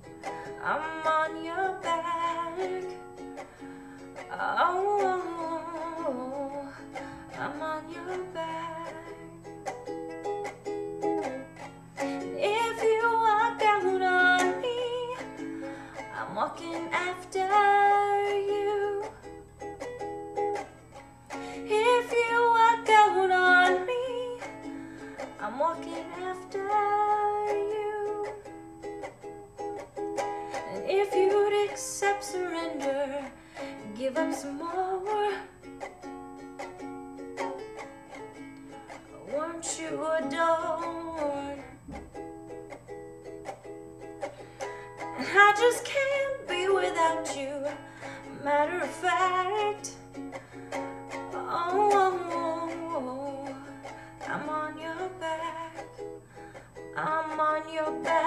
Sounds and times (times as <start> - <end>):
Acoustic guitar: 0.0 - 58.2
Ukulele: 0.0 - 58.2.